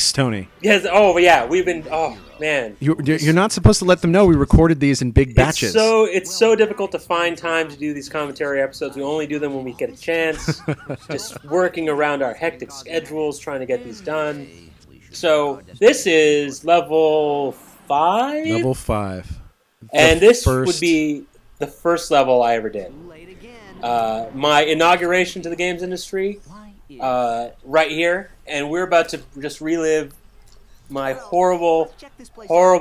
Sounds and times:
Speech: 0.0 - 21.2.

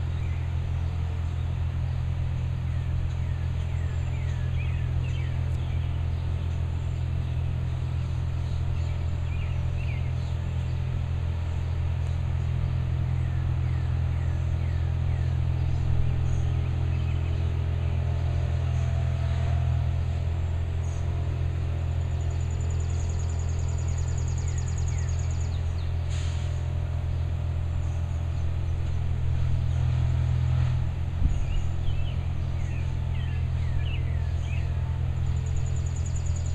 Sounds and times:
Vehicle: 0.0 - 36.5.

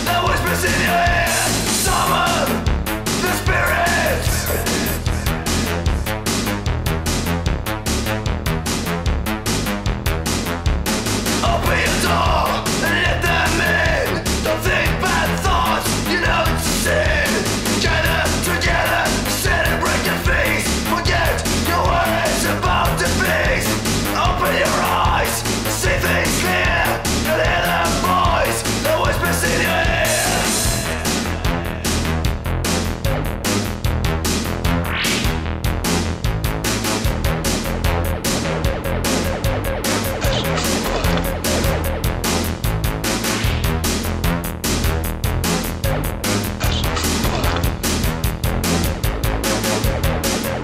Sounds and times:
Electronic dance music: 0.0 - 8.0, 11.0 - 33.6, 36.7 - 44.0, 45.5 - 50.6.

